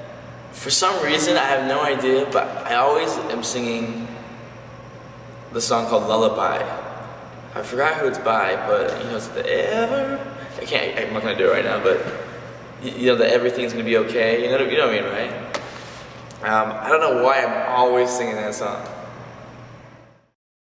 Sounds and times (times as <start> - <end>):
Speech: 0.6 - 4.2, 5.5 - 6.8, 7.6 - 12.2, 12.8 - 15.4, 16.4 - 19.0.